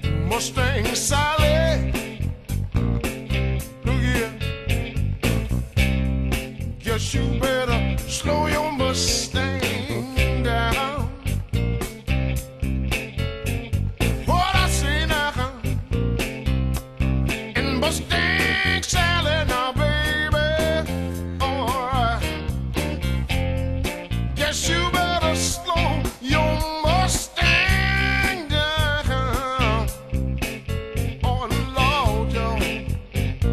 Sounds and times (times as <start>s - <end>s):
Music: 0.0s - 33.5s.